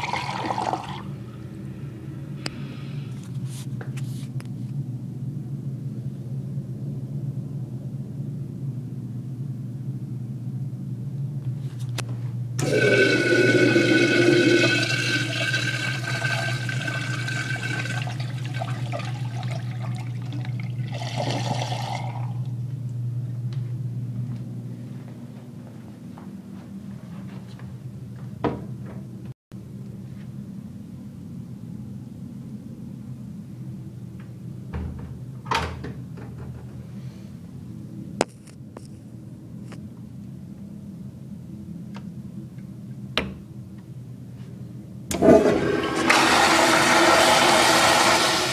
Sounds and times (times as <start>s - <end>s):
Liquid: 0.0s - 1.1s, 12.6s - 22.5s
Toilet flush: 0.0s - 1.1s, 12.6s - 22.4s, 45.1s - 48.5s.